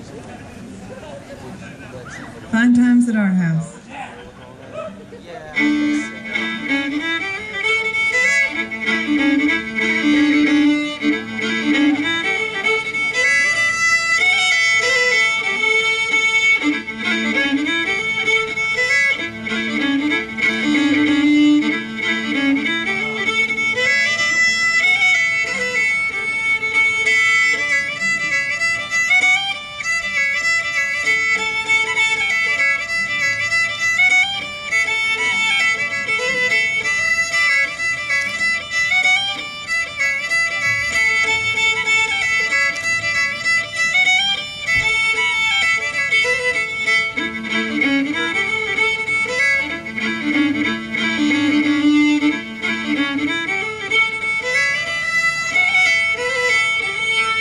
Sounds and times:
Violin, fiddle: 1.9s - 57.4s.

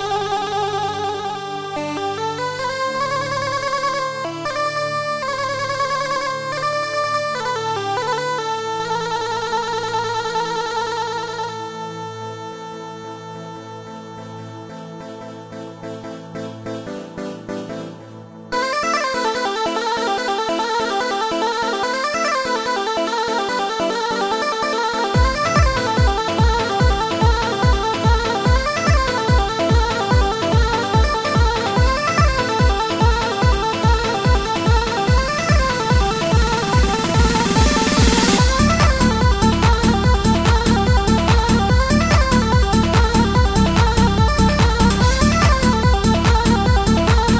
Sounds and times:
Funny music: 0.0s - 47.4s.

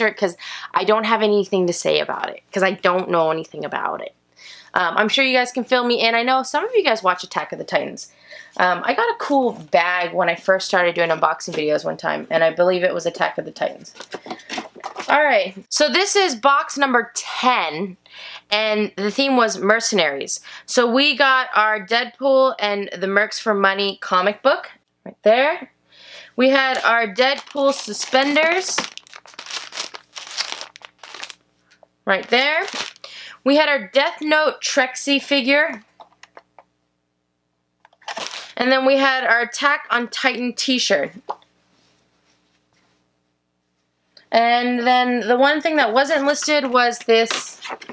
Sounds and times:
Speech: 0.0s - 14.0s, 15.0s - 25.8s, 26.4s - 28.9s, 32.1s - 32.8s, 33.4s - 35.9s, 38.5s - 41.3s, 44.2s - 47.7s
Inside, small room: 0.0s - 47.9s
Crumpling, crinkling: 26.7s - 31.4s, 32.5s - 33.1s, 37.9s - 38.6s.

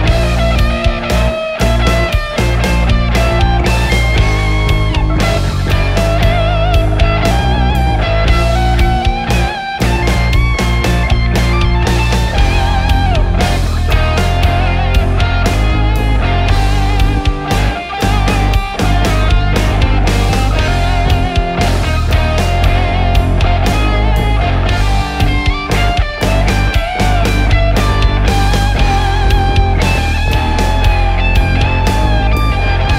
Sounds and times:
Progressive rock: 0.0s - 32.9s.

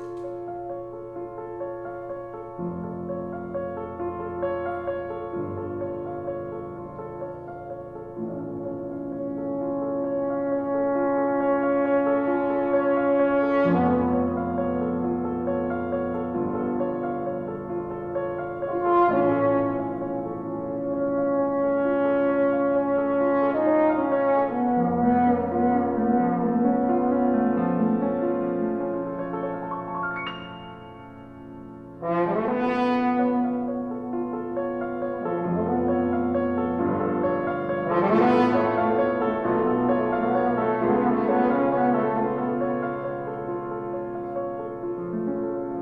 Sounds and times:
French horn: 0.0s - 45.8s
Piano: 0.0s - 45.8s.

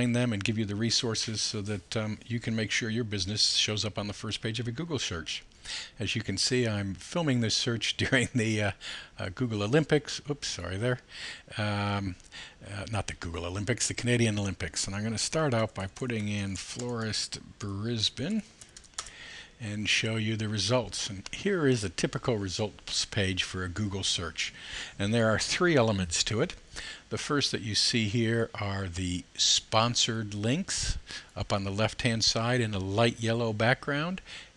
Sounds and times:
Speech: 0.0s - 18.5s, 19.6s - 34.3s.

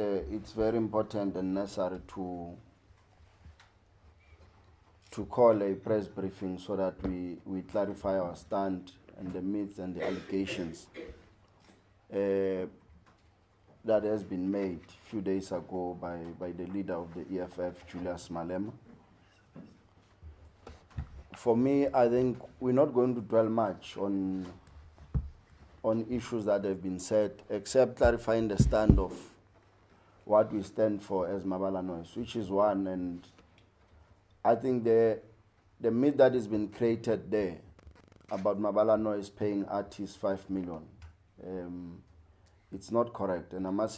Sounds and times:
Speech: 0.0s - 2.7s, 5.1s - 11.1s, 12.1s - 12.8s, 13.8s - 18.8s, 21.4s - 24.6s, 25.8s - 29.4s, 30.3s - 33.4s, 34.4s - 37.7s, 38.3s - 42.1s, 42.7s - 43.9s.

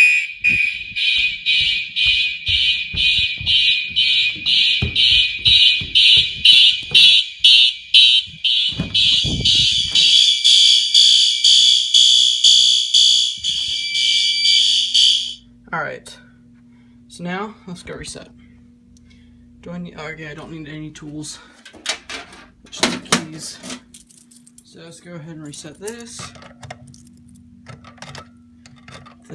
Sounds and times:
Fire alarm: 0.0s - 15.5s.

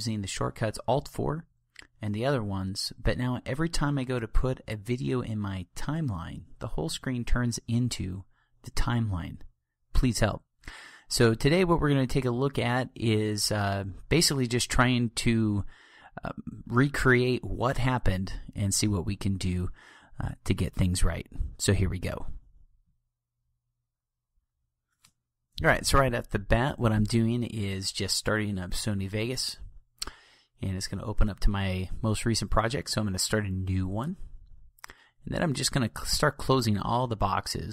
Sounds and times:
Speech: 0.0s - 10.5s, 11.1s - 22.4s, 25.6s - 29.7s, 30.6s - 34.3s, 35.2s - 37.7s.

